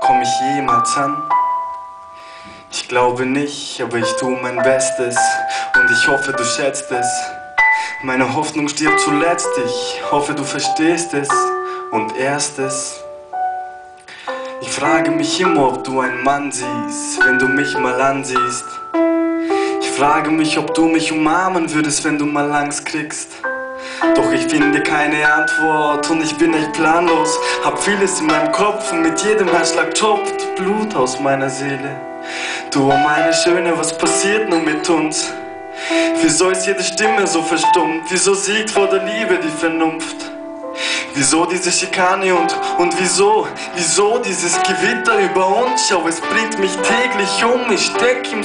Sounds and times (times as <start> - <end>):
Speech: 0.0 - 1.3, 2.7 - 7.4, 8.0 - 13.0, 14.6 - 18.8, 19.8 - 23.5, 24.2 - 32.0, 32.7 - 35.4, 36.1 - 40.4, 41.1 - 48.4
Music: 0.0 - 48.4.